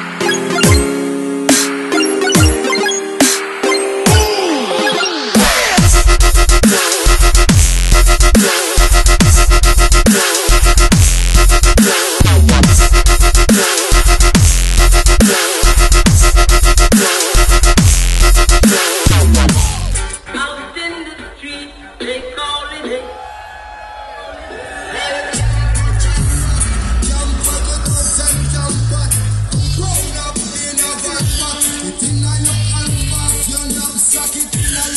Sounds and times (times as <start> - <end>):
Dubstep: 1.5 - 21.3, 25.1 - 34.9.